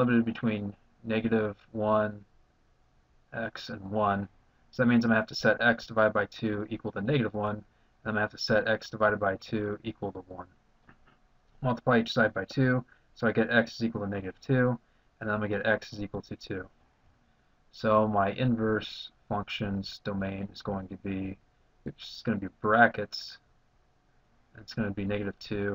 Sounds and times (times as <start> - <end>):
Speech: 0.0 - 2.3, 3.4 - 10.5, 11.6 - 16.7, 17.7 - 23.5, 24.6 - 25.7
Inside, small room: 0.0 - 25.7.